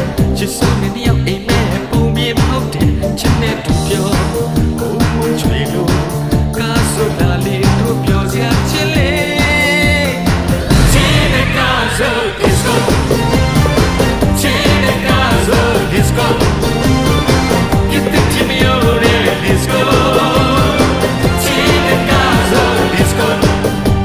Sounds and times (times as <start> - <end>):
Music: 0.0 - 24.0.